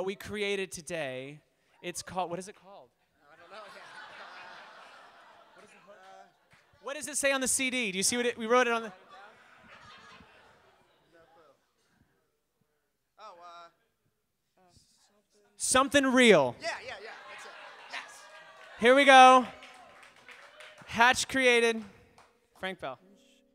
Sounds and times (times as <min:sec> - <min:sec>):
Speech: 0:05.6 - 0:09.3, 0:15.6 - 0:18.2, 0:18.8 - 0:19.5, 0:20.9 - 0:21.9, 0:22.6 - 0:23.0.